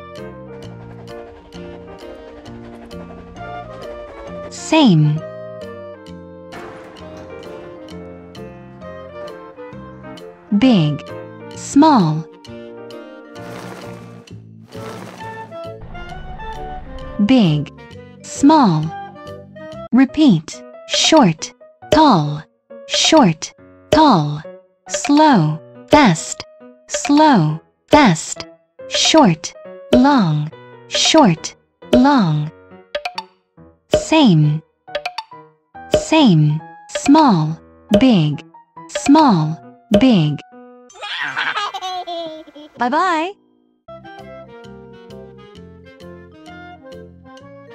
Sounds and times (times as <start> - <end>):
Music: 0.0 - 41.0, 42.5 - 47.7
Speech: 4.5 - 5.2, 10.5 - 11.0, 11.6 - 12.3, 17.2 - 18.9, 20.0 - 24.4, 25.0 - 32.5, 34.0 - 34.6, 36.0 - 40.4, 42.8 - 43.4.